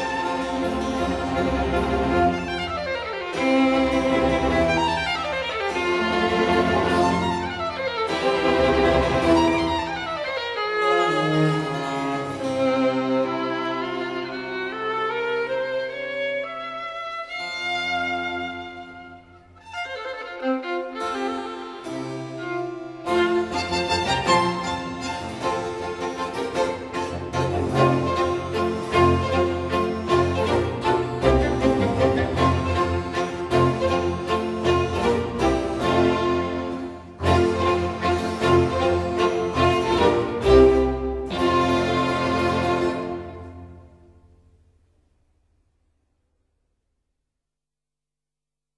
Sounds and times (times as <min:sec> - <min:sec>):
Cello: 0:00.0 - 0:44.2
String section: 0:00.0 - 0:44.7.